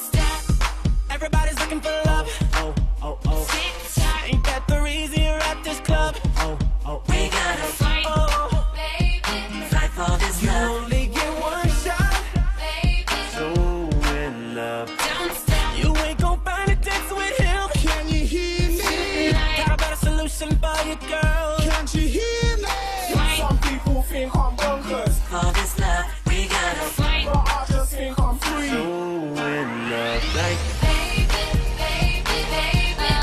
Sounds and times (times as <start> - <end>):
Music: 0.0 - 33.2.